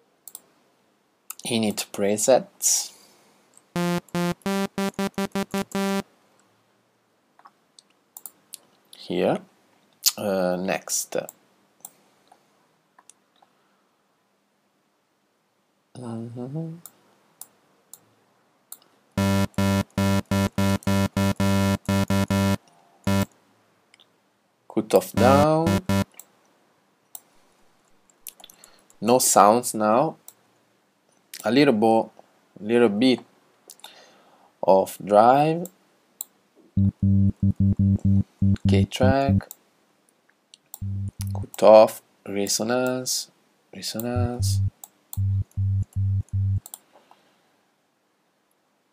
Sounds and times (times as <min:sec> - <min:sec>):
Speech: 0:01.3 - 0:03.0, 0:09.0 - 0:09.5, 0:10.1 - 0:11.4, 0:16.0 - 0:16.8, 0:24.7 - 0:25.8, 0:29.0 - 0:30.2, 0:31.4 - 0:33.3, 0:34.6 - 0:35.8, 0:38.6 - 0:39.5, 0:41.2 - 0:44.6.